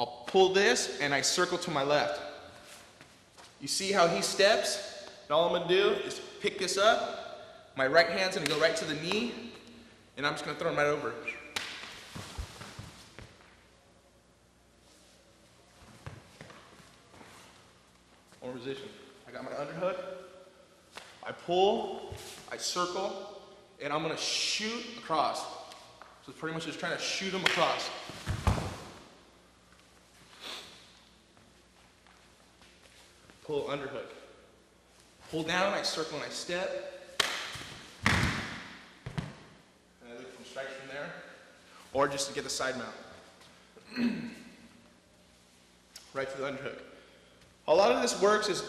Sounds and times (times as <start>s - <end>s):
Speech: 0.0s - 2.2s, 3.6s - 7.1s, 7.8s - 9.4s, 10.2s - 11.4s, 18.4s - 20.1s, 26.3s - 27.9s, 33.4s - 34.2s, 35.3s - 36.8s, 40.0s - 41.3s, 41.9s - 43.1s, 46.1s - 46.9s, 47.7s - 48.6s.